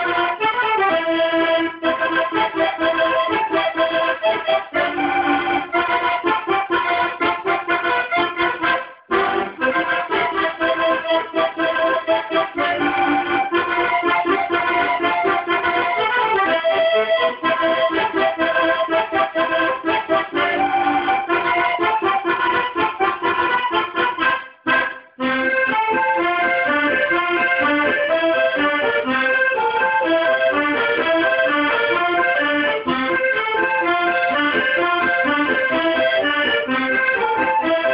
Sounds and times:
Musical instrument: 0.0 - 37.9.

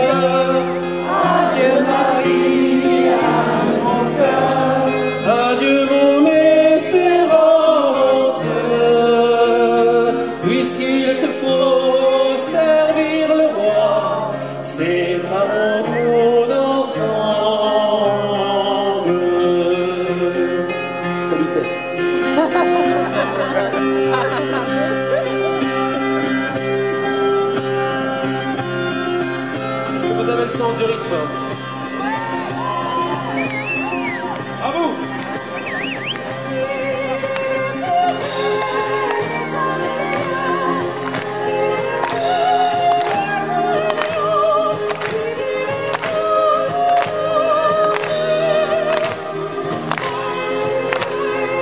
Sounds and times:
Male singing: 0.0 - 0.8, 3.9 - 20.7.

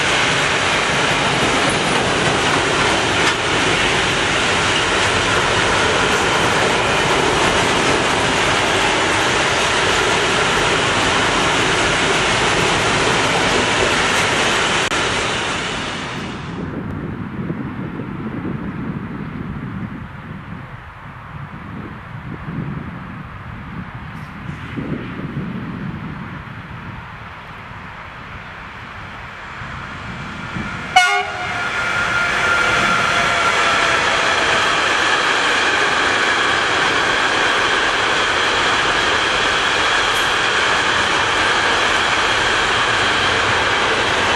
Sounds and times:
Railroad car, train wagon: 0.0 - 44.3
Train horn: 30.9 - 34.7.

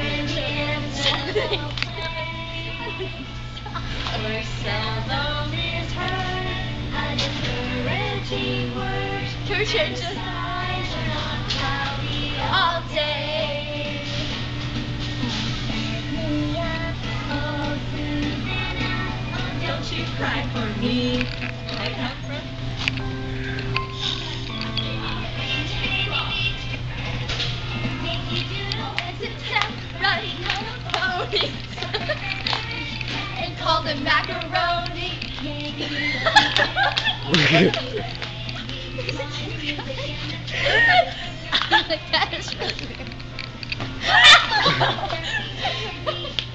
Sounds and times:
Female singing: 0.0 - 3.3, 4.0 - 14.4, 15.2 - 22.4, 24.8 - 43.0, 44.1 - 46.5
Music: 0.0 - 46.5.

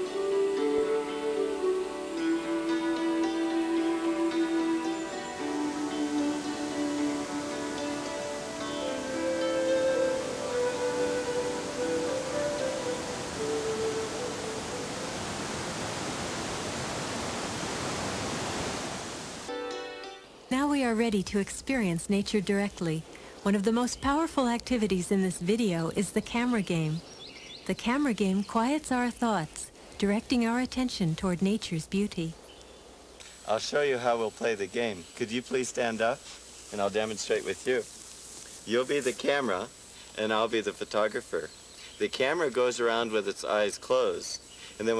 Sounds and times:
Music: 0.0 - 15.2, 19.5 - 20.4
Speech: 20.5 - 27.0, 27.7 - 32.4, 33.5 - 37.9, 38.7 - 44.9.

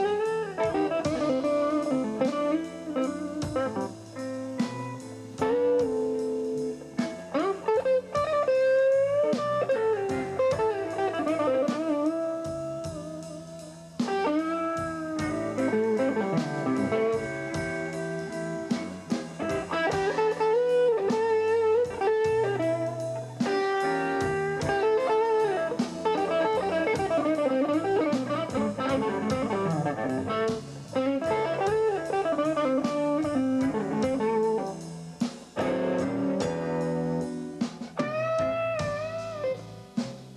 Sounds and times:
Blues: 0.0 - 40.3
Country: 0.0 - 40.3
Guitar: 0.0 - 40.3.

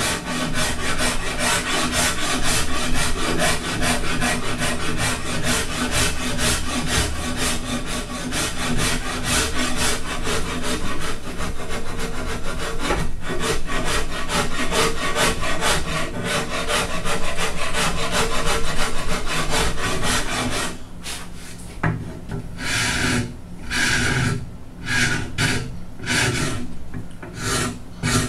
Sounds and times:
Sawing: 0.0 - 20.8, 22.6 - 28.2.

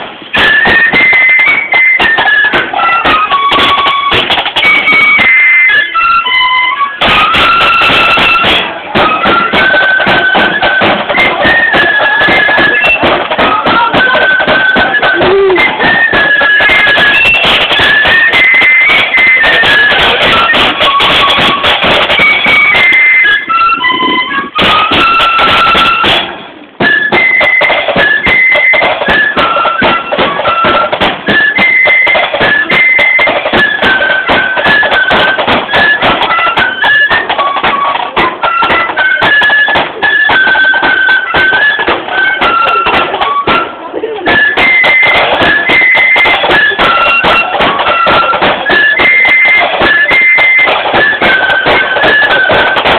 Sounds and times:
Music: 0.0 - 52.9.

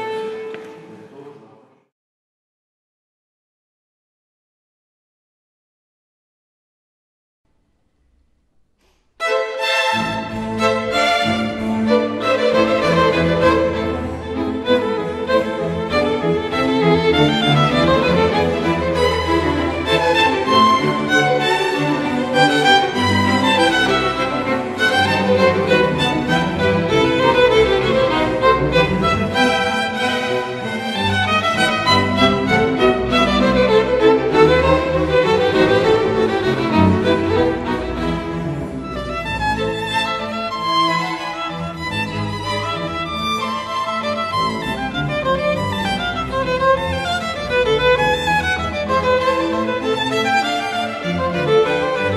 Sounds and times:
Violin, fiddle: 0.0 - 1.0, 9.2 - 52.1
Orchestra: 0.0 - 1.8, 7.8 - 52.1.

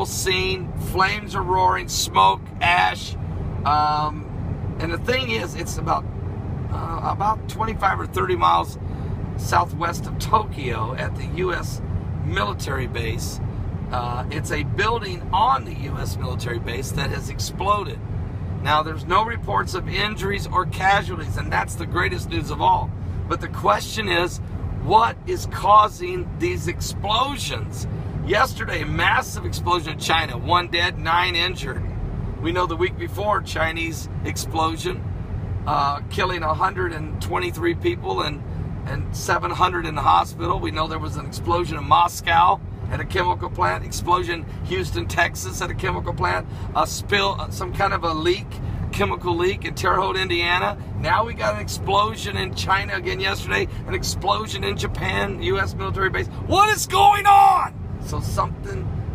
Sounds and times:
Speech: 0.0 - 4.2, 4.8 - 6.0, 6.7 - 8.8, 9.4 - 18.0, 18.6 - 31.8, 32.4 - 35.0, 35.7 - 58.9.

